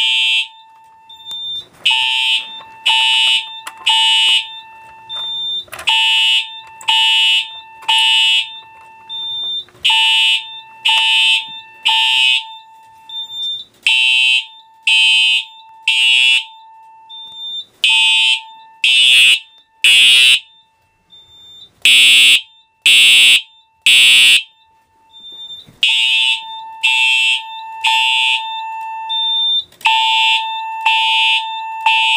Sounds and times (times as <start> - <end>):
Fire alarm: 0.0 - 32.1.